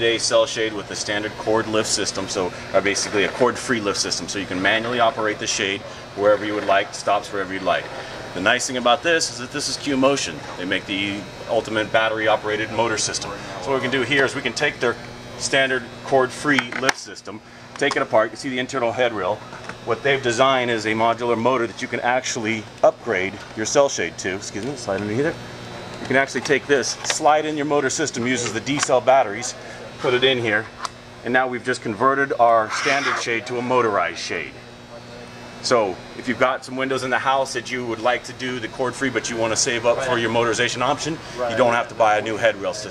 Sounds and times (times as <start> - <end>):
Speech: 0.0 - 25.4, 26.0 - 42.9.